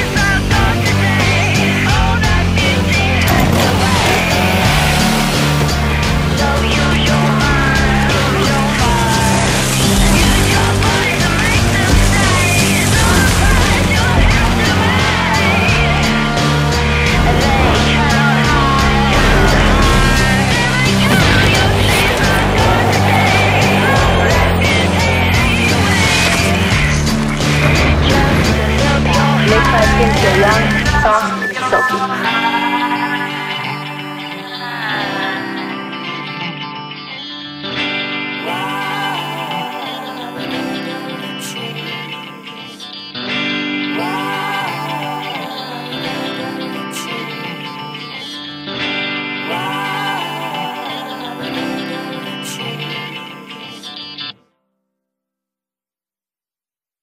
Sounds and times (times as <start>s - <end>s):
Music: 0.0s - 55.2s.